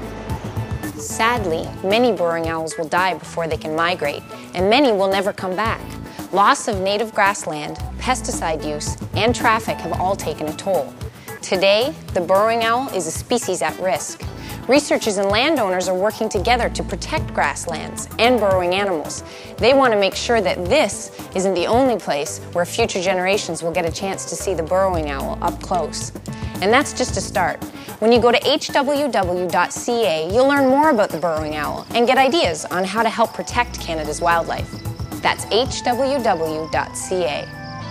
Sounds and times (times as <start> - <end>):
Music: 0.0 - 37.9
Speech: 1.0 - 5.8, 6.4 - 37.5.